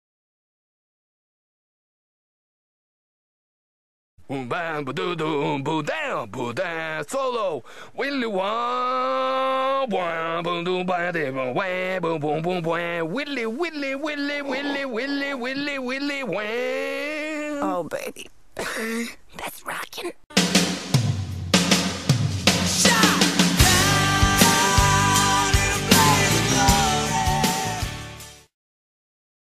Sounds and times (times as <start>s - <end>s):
Electric guitar: 22.9s - 28.4s.